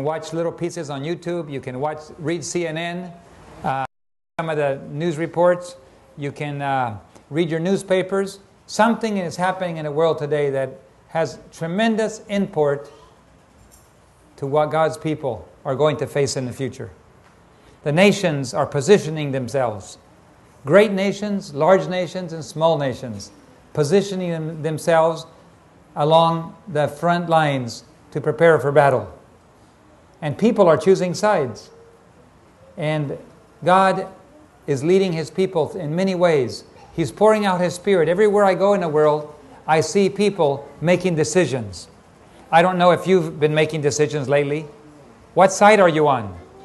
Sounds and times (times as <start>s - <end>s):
Speech: 0.0s - 13.0s, 14.4s - 17.0s, 17.8s - 20.0s, 20.7s - 25.4s, 26.0s - 29.2s, 30.2s - 31.7s, 32.8s - 44.8s, 45.4s - 46.6s.